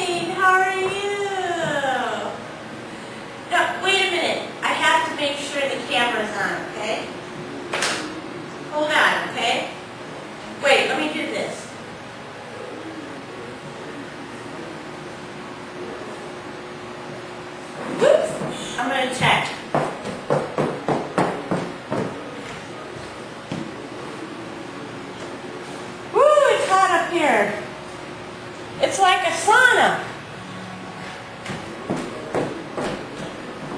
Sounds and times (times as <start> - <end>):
Speech: 0.0 - 2.4, 10.6 - 11.8, 18.1 - 19.6, 28.8 - 30.1.